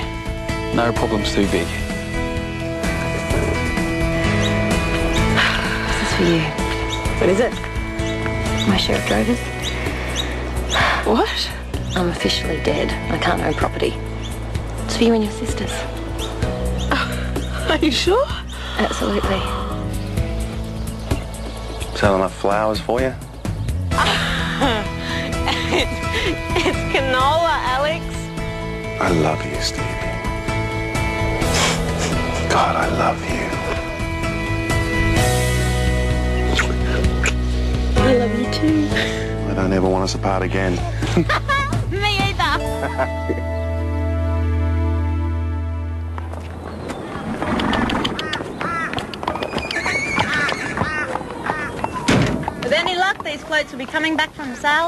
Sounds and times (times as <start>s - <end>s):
Horse: 46.8s - 54.8s
Quack: 50.2s - 51.8s.